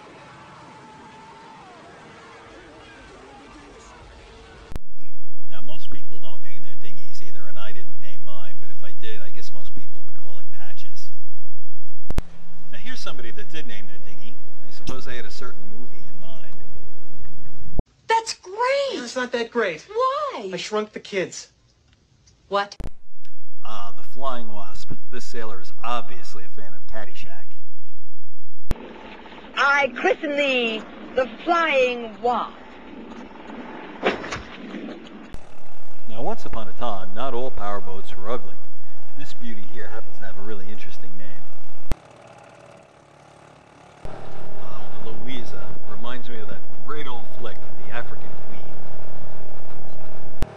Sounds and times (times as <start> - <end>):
Speech: 5.5 - 11.1, 12.7 - 16.6, 23.6 - 27.6, 29.6 - 32.5, 36.1 - 41.4, 44.6 - 48.7.